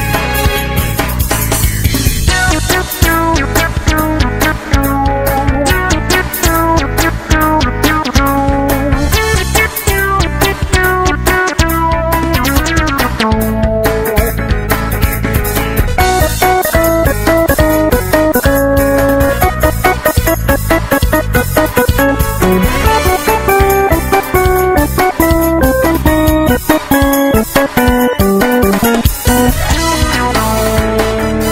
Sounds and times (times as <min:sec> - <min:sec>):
Music: 0:00.0 - 0:31.5.